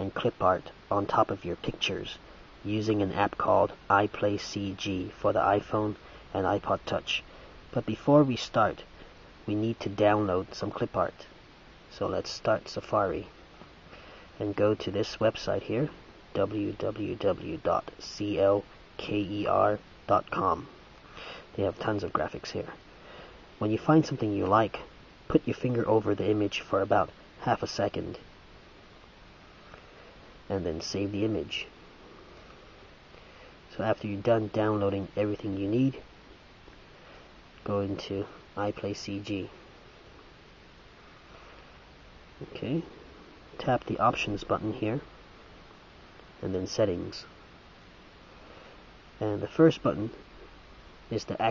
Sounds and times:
Speech: 0.0s - 11.3s, 11.9s - 13.3s, 14.4s - 20.8s, 21.5s - 22.8s, 23.6s - 28.2s, 30.5s - 31.7s, 33.7s - 36.0s, 37.6s - 39.5s, 42.4s - 42.9s, 43.6s - 45.1s, 46.4s - 47.4s, 49.2s - 50.2s, 51.1s - 51.5s.

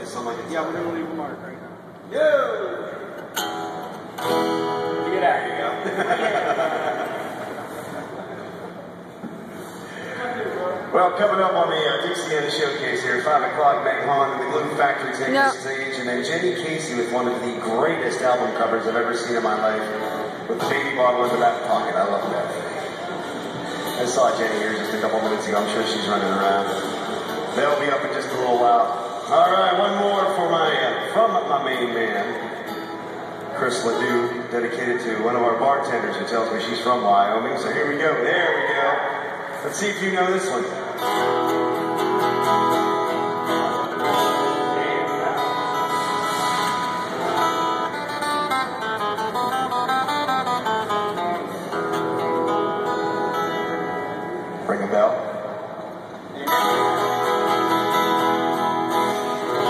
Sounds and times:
Speech: 0.0s - 2.8s, 10.0s - 23.1s, 24.0s - 26.8s, 27.6s - 32.4s, 33.6s - 40.8s, 44.4s - 45.5s, 54.6s - 55.4s.

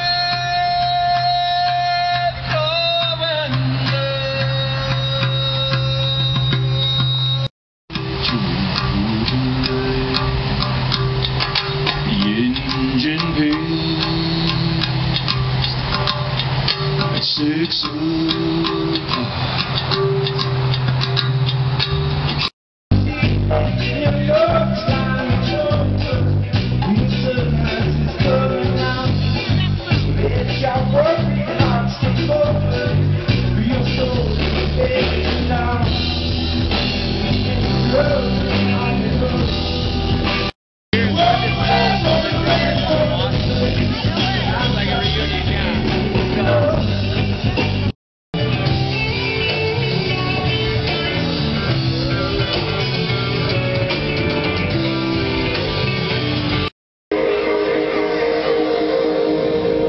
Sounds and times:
Music: 0.0s - 59.8s
Speech: 27.2s - 32.3s, 41.0s - 47.9s.

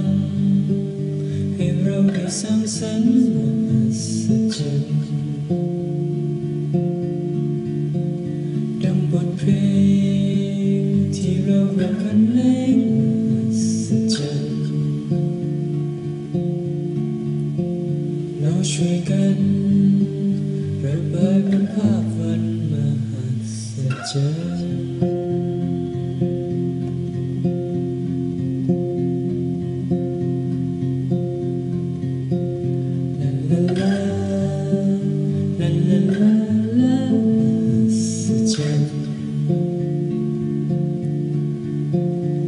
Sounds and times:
Vocal music: 0.0s - 42.4s.

